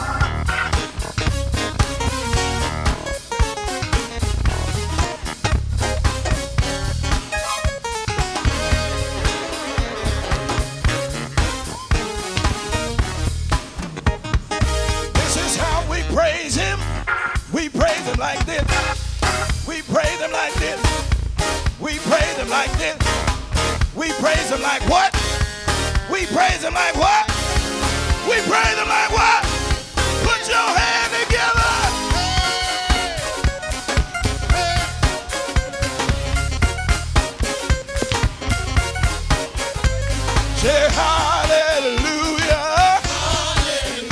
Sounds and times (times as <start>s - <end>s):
Music: 0.0s - 44.1s.